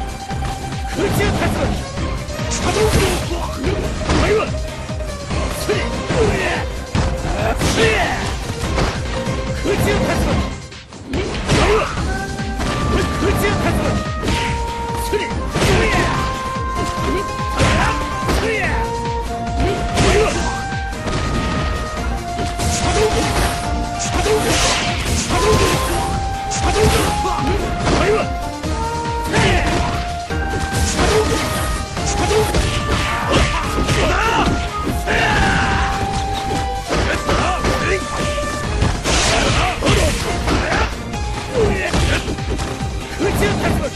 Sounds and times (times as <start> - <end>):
Music: 0.0 - 43.9.